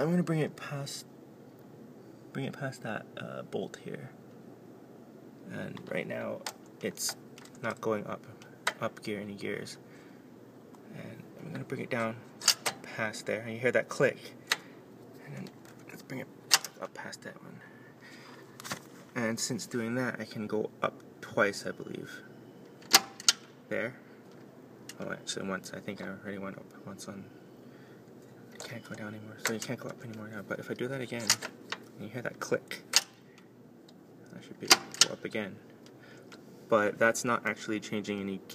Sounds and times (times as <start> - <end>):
Speech: 0.0 - 1.1, 2.3 - 4.2, 5.5 - 9.8, 10.9 - 12.2, 12.9 - 14.4, 15.2 - 17.7, 19.2 - 22.3, 23.7 - 24.0, 25.0 - 27.3, 28.6 - 31.4, 32.0 - 32.9, 34.3 - 35.6, 36.7 - 38.5.